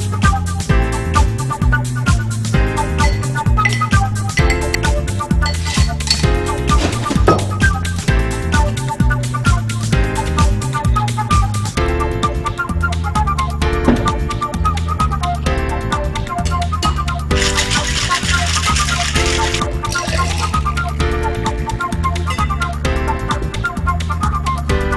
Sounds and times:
Stir: 0:05.5 - 0:06.3, 0:17.4 - 0:20.9.

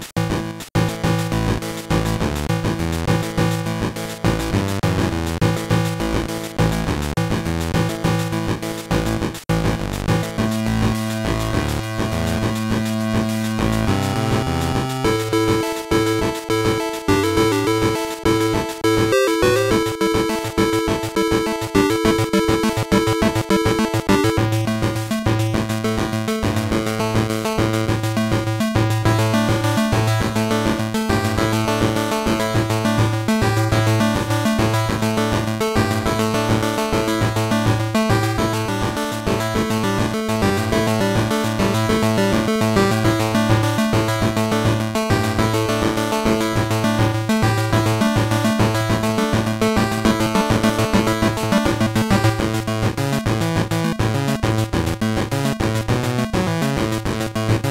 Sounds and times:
Music: 0:00.0 - 0:57.7.

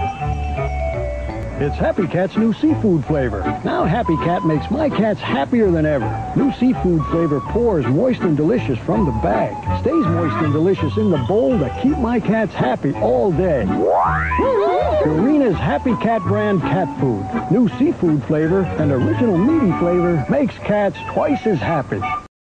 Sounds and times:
Music: 0:00.0 - 0:22.3
Speech: 0:01.6 - 0:13.7, 0:15.0 - 0:22.2.

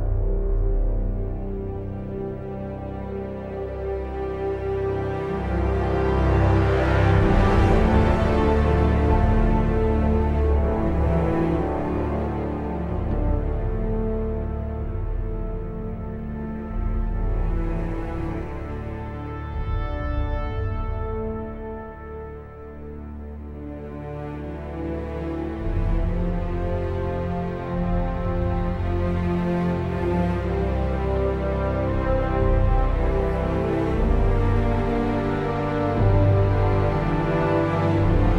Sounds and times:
Music: 0:00.0 - 0:38.3.

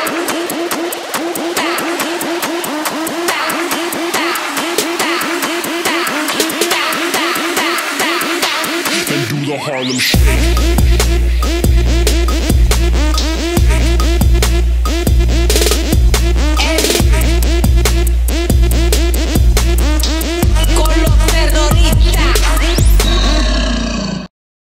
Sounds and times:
Pop music: 0:00.0 - 0:23.4
Theme music: 0:00.0 - 0:23.4
Dance music: 0:00.0 - 0:23.5.

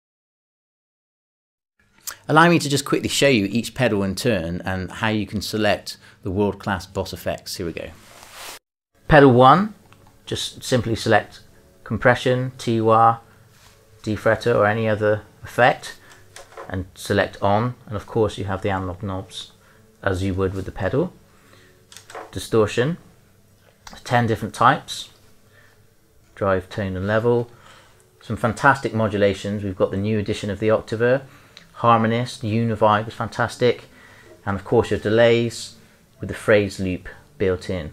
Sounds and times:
Speech: 0:02.1 - 0:08.0, 0:09.1 - 0:13.2, 0:14.0 - 0:16.0, 0:16.7 - 0:21.2, 0:22.3 - 0:23.1, 0:23.9 - 0:25.2, 0:26.4 - 0:27.5, 0:28.2 - 0:37.9.

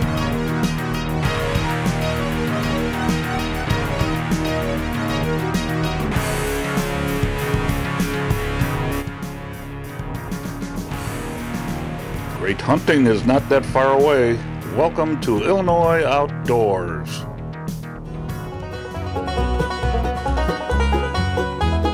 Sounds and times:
Music: 0:00.0 - 0:21.9
Speech: 0:12.4 - 0:17.3.

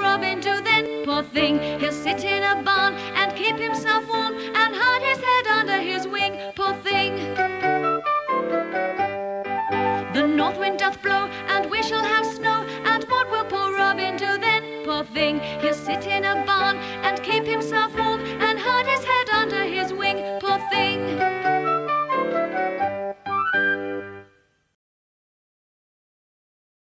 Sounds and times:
Music: 0:00.0 - 0:24.8.

